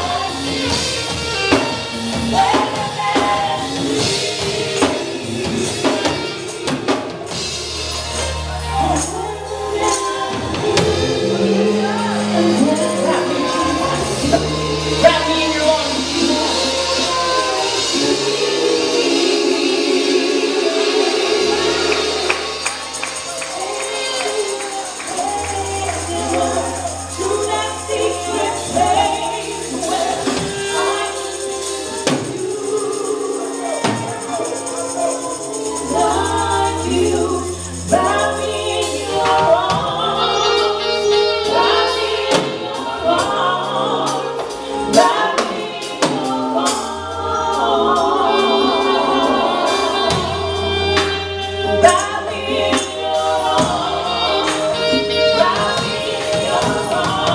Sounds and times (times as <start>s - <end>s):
Gospel music: 0.0s - 57.3s
Singing: 8.2s - 57.3s
Tambourine: 20.8s - 40.9s.